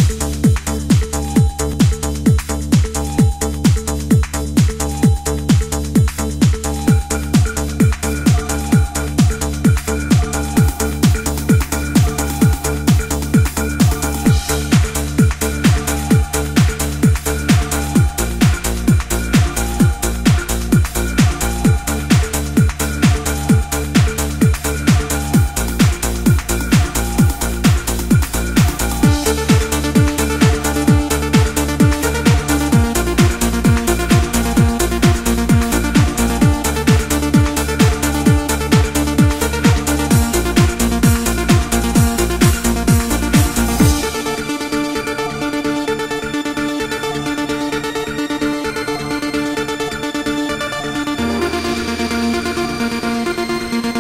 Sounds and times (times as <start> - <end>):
Music: 0.0 - 54.0.